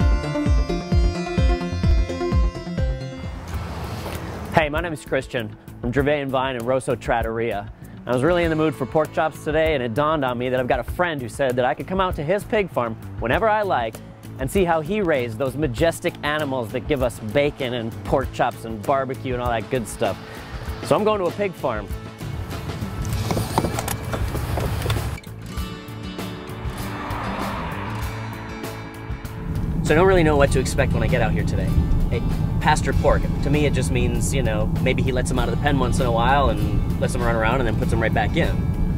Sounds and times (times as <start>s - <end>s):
Music: 0.0s - 38.9s
Speech: 4.6s - 20.2s, 20.9s - 22.0s, 29.9s - 38.6s.